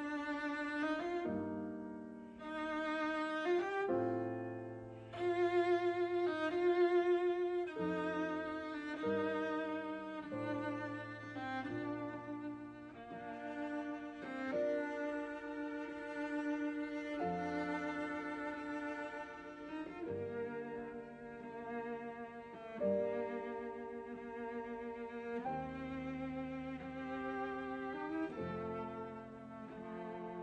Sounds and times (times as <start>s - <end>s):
Cello: 0.0s - 30.4s
Violin, fiddle: 0.0s - 30.4s.